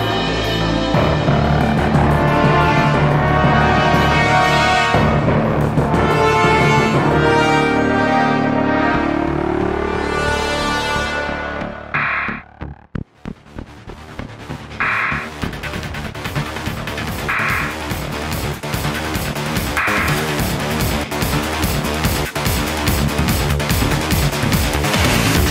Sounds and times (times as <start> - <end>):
Electronic music: 0.0 - 25.5
Soundtrack music: 0.0 - 25.5.